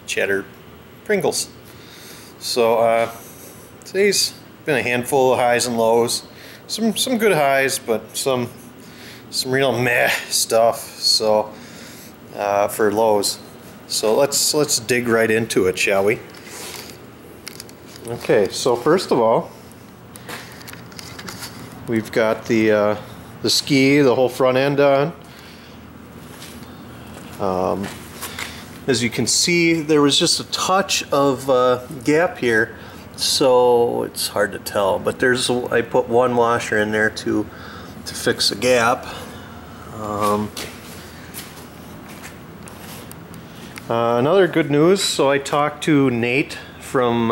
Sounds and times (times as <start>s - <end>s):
Speech: 0.1s - 1.6s, 2.4s - 3.2s, 3.9s - 8.6s, 9.3s - 11.6s, 12.3s - 16.2s, 18.0s - 19.6s, 21.9s - 25.2s, 27.4s - 28.0s, 28.9s - 37.5s, 38.1s - 39.2s, 39.9s - 40.7s, 43.9s - 47.3s.